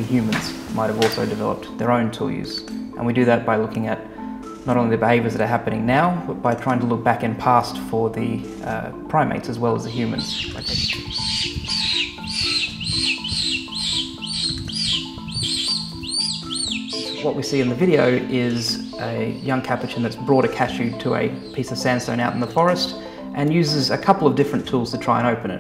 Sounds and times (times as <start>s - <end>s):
Speech: 0.0s - 4.0s, 4.7s - 10.9s, 17.2s - 25.6s
Music: 0.0s - 25.6s.